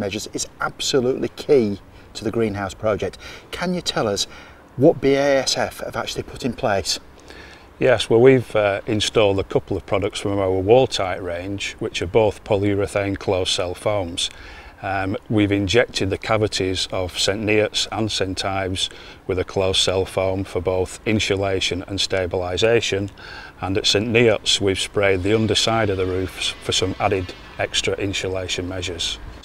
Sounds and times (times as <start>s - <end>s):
Speech: 0.0s - 7.0s, 7.8s - 29.2s.